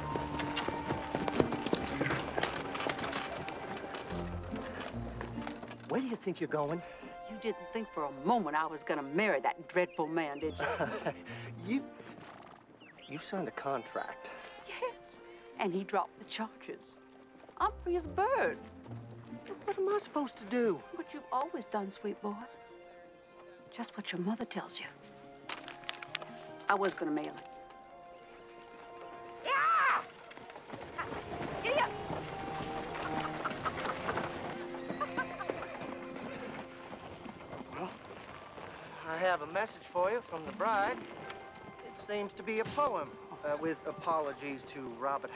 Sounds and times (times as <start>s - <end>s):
Music: 0.0s - 45.3s.